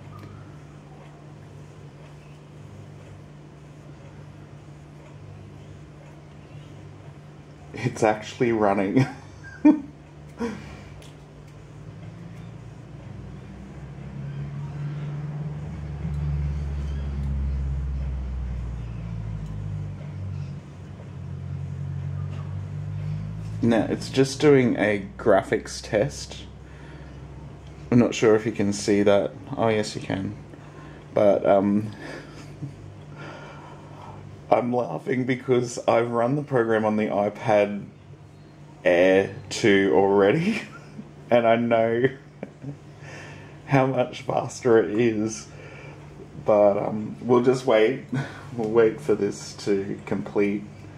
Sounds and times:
Inside, small room: 0.0s - 50.9s
Speech: 7.6s - 9.2s, 23.6s - 26.6s, 27.9s - 30.5s, 31.1s - 32.0s, 34.5s - 38.0s, 38.8s - 42.2s, 43.7s - 45.6s, 46.4s - 50.8s.

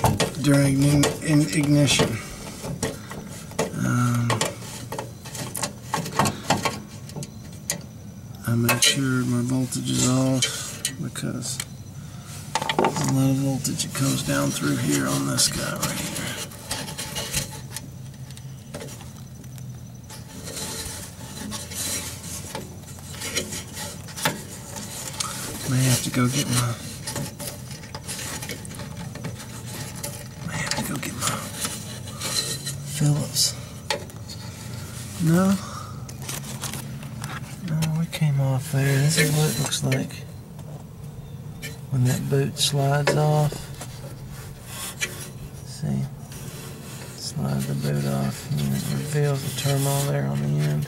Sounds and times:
Speech: 0.3s - 2.3s, 3.7s - 4.5s, 8.4s - 11.7s, 12.9s - 16.4s, 25.6s - 26.9s, 30.4s - 31.6s, 32.9s - 33.6s, 35.2s - 35.7s, 37.6s - 40.3s, 41.9s - 43.6s, 45.7s - 46.2s, 47.2s - 50.8s.

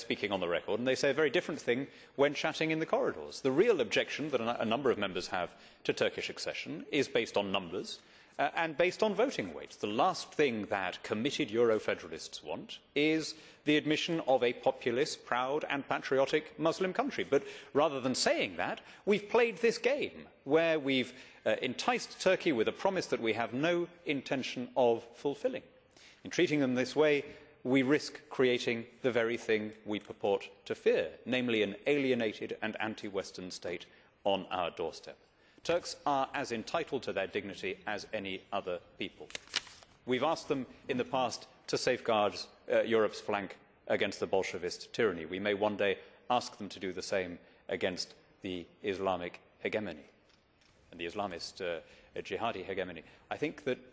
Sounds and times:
Speech: 0.0s - 39.4s, 40.1s - 50.1s, 50.9s - 53.9s.

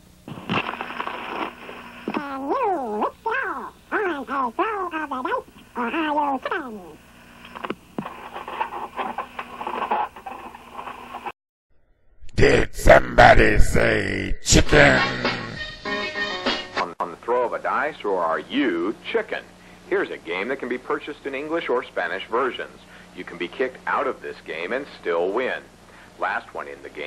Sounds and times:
Speech: 2.2s - 7.0s, 12.4s - 15.6s, 16.8s - 27.0s.

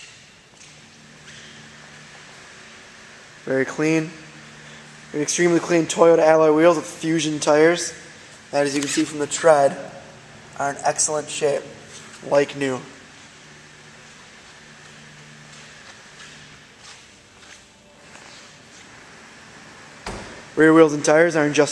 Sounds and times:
Speech: 3.4s - 4.2s, 5.1s - 10.0s, 10.6s - 13.0s, 20.6s - 21.7s.

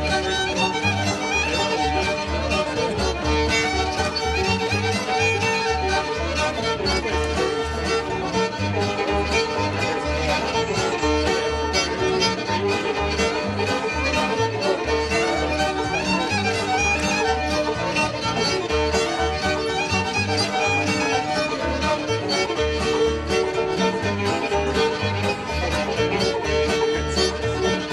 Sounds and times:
Music: 0.0s - 27.9s.

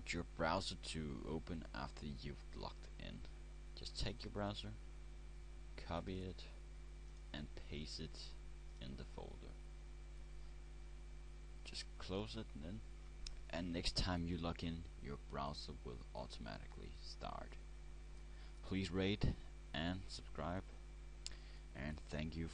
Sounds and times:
Speech: 0.0s - 4.8s, 5.8s - 6.6s, 7.3s - 9.6s, 11.6s - 12.9s, 13.5s - 17.6s, 18.6s - 20.8s, 21.8s - 22.5s.

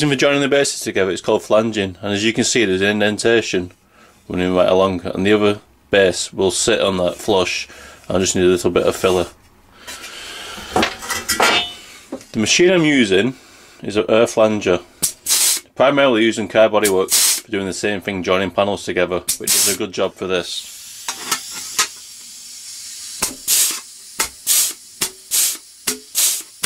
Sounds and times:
Speech: 0.0s - 9.4s, 12.3s - 14.9s, 15.8s - 20.7s
Tools: 10.8s - 11.8s, 21.1s - 22.0s, 23.2s - 26.6s.

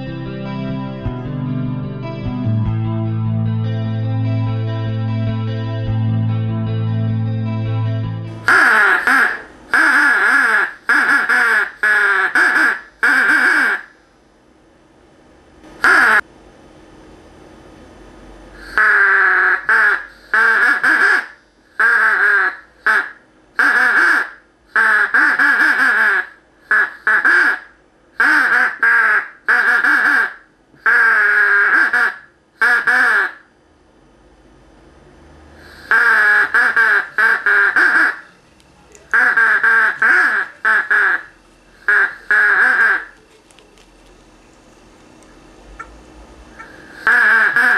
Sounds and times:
Duck: 8.4s - 13.9s, 15.8s - 16.2s, 18.6s - 33.4s, 35.7s - 38.2s, 39.1s - 41.2s, 41.8s - 43.1s, 46.6s - 47.7s.

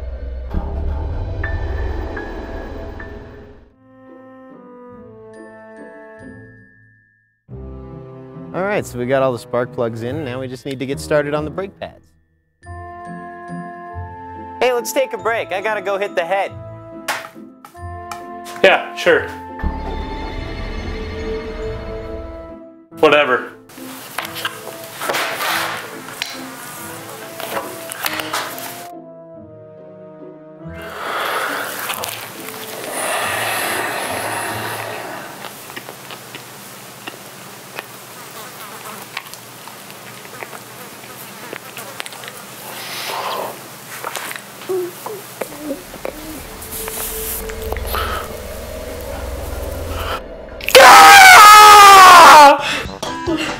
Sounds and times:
Music: 0.0s - 35.5s, 45.4s - 53.5s
Speech: 8.6s - 12.0s, 14.6s - 16.5s, 23.0s - 23.6s.

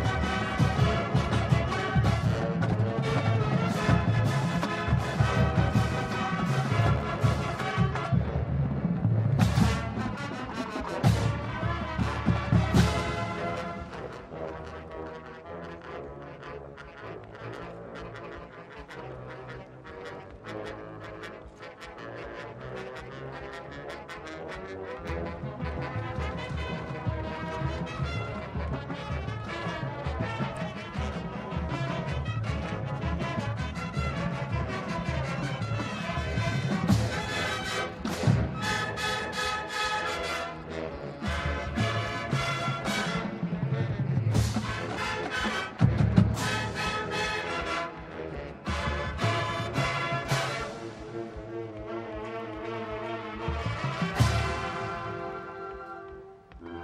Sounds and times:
Music: 0.0s - 56.8s.

